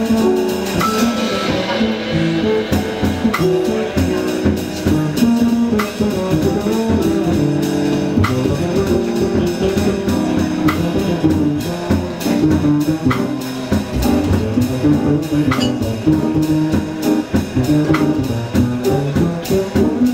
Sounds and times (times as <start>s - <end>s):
Jazz: 0.0s - 20.1s.